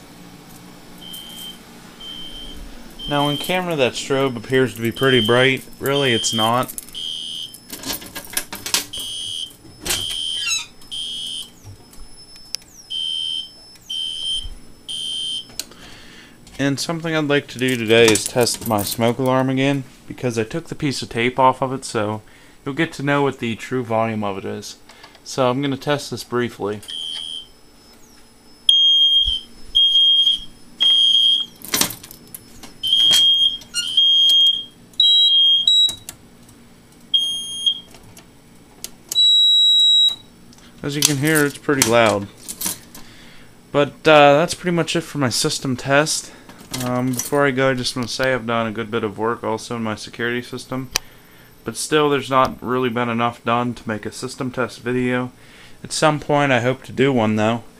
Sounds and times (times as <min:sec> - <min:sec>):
Fire alarm: 0:01.0 - 0:08.0, 0:08.6 - 0:15.6, 0:26.8 - 0:36.1, 0:37.1 - 0:38.0, 0:39.1 - 0:40.3.